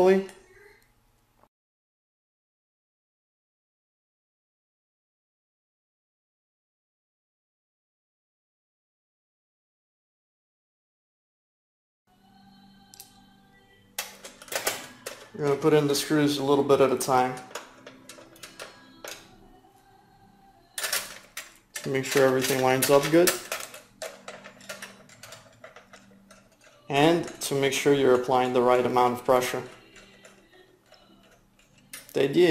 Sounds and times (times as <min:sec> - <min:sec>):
Speech: 0:00.0 - 0:00.8, 0:15.4 - 0:17.5, 0:21.8 - 0:23.4, 0:26.9 - 0:29.8, 0:32.1 - 0:32.5.